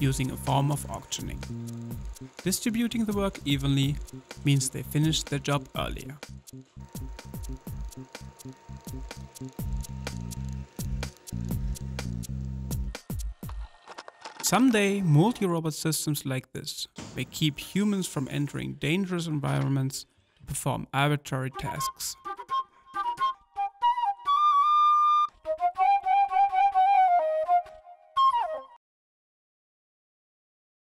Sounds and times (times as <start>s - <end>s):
Flute: 21.6s - 28.8s.